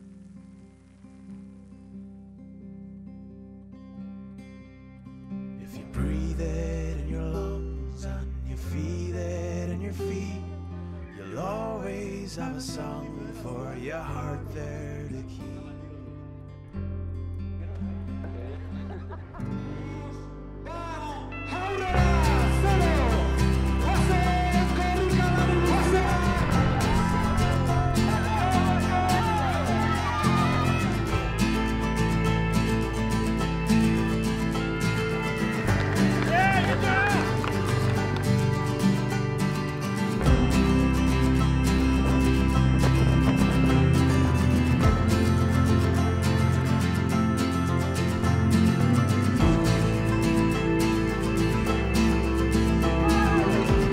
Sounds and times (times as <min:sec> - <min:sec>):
Music: 0:00.0 - 0:53.9
Speech: 0:19.6 - 0:29.7.